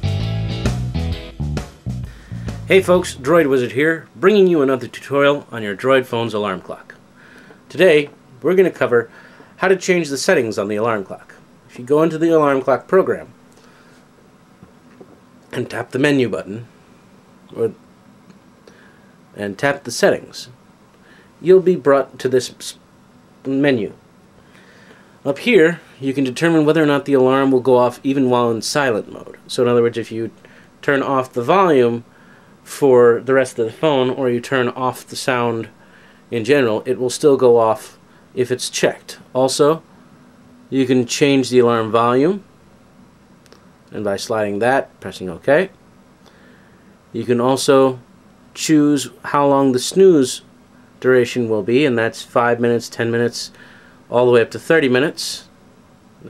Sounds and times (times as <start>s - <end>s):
Speech: 2.7s - 7.0s, 7.7s - 13.4s, 15.5s - 16.7s, 17.5s - 17.8s, 19.4s - 20.6s, 21.4s - 22.8s, 23.4s - 24.0s, 25.2s - 32.1s, 32.7s - 39.9s, 40.7s - 42.5s, 43.9s - 45.8s, 47.1s - 55.6s.